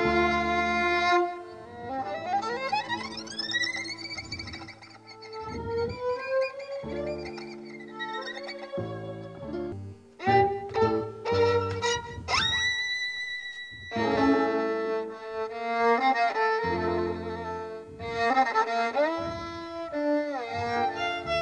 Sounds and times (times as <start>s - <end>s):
Violin, fiddle: 0.0s - 21.4s.